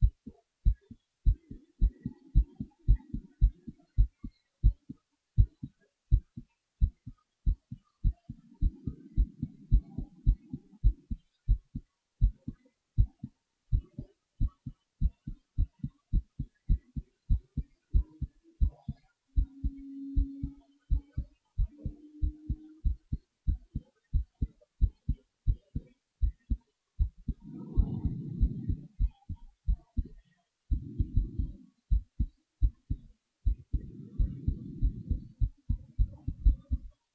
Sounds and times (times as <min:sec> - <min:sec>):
Heart sounds, heartbeat: 0:00.0 - 0:37.0.